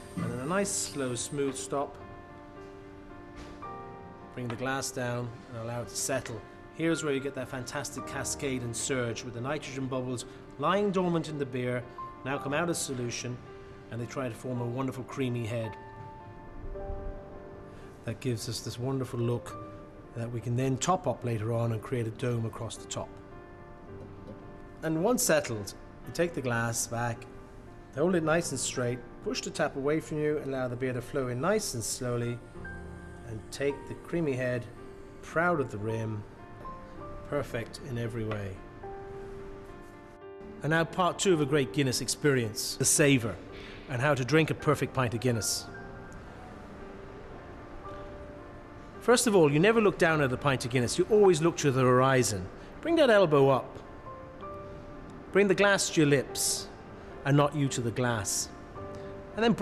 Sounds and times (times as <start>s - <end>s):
Music: 0.0s - 59.6s
Speech: 0.2s - 1.9s, 4.4s - 15.8s, 18.1s - 19.5s, 20.2s - 23.1s, 24.8s - 27.2s, 40.6s - 45.7s, 49.1s - 53.7s, 55.4s - 56.7s, 57.3s - 58.5s, 59.4s - 59.6s.